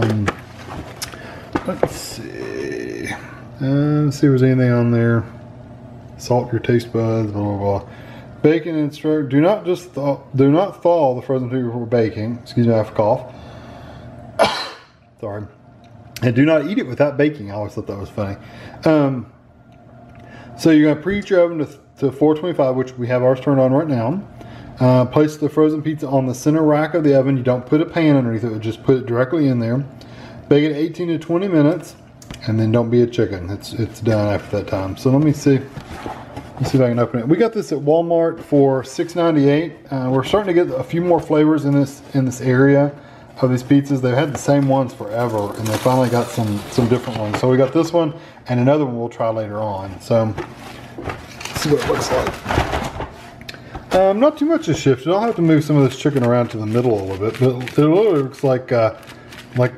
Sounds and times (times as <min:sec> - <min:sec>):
Speech: 0:00.0 - 0:00.4, 0:01.6 - 0:05.4, 0:06.2 - 0:13.3, 0:15.2 - 0:15.6, 0:16.2 - 0:19.3, 0:20.6 - 0:29.9, 0:30.5 - 0:35.7, 0:36.6 - 0:50.5, 0:51.5 - 0:52.4, 0:53.9 - 0:59.0, 0:59.6 - 0:59.7.